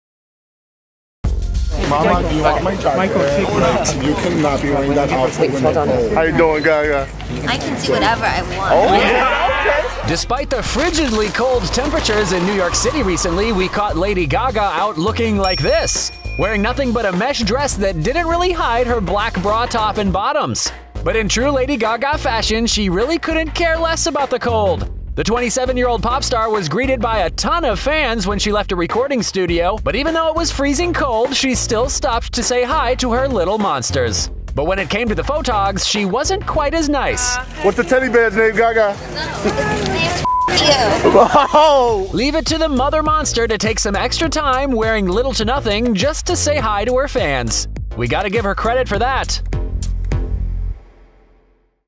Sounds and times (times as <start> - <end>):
Music: 1.2 - 51.8
Speech: 1.7 - 49.4.